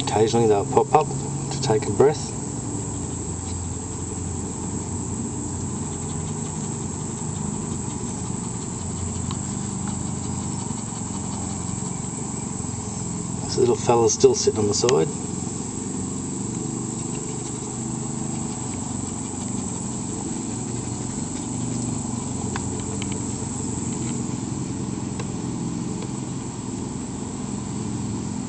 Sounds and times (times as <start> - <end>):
Speech: 0.0 - 2.4, 13.4 - 15.2.